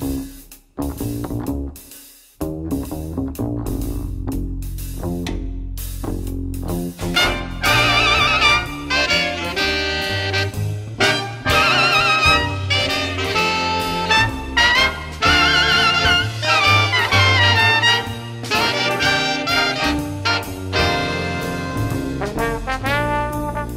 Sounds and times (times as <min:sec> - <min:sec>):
Trumpet: 0:07.0 - 0:23.7.